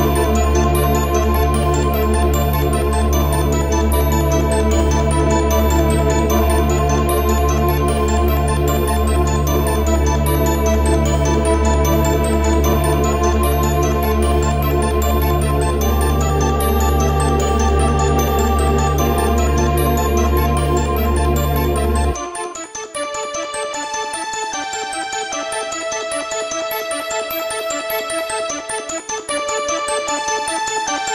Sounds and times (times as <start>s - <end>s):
Music: 0.0s - 31.1s.